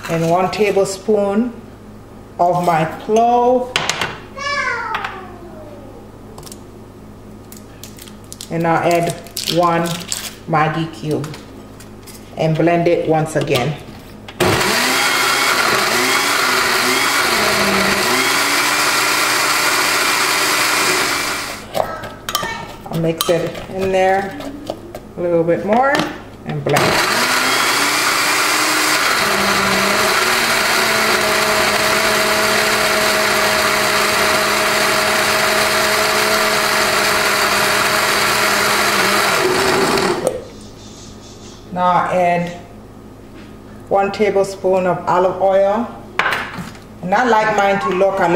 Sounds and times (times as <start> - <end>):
Blender: 14.4 - 21.7, 26.8 - 40.4.